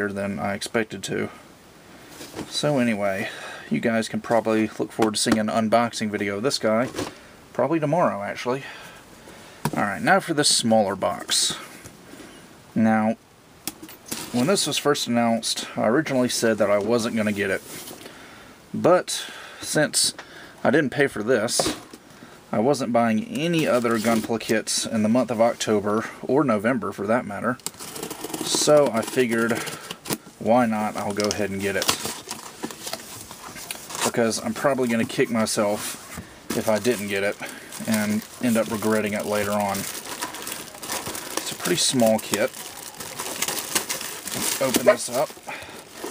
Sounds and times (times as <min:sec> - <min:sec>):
Speech: 0:00.0 - 0:01.4, 0:02.5 - 0:08.7, 0:09.7 - 0:11.7, 0:12.8 - 0:13.2, 0:14.3 - 0:17.6, 0:18.8 - 0:21.8, 0:22.5 - 0:27.6, 0:28.4 - 0:29.7, 0:30.4 - 0:32.1, 0:34.0 - 0:35.9, 0:36.5 - 0:39.9, 0:41.4 - 0:42.6, 0:44.5 - 0:45.4
Inside, small room: 0:00.0 - 0:46.1.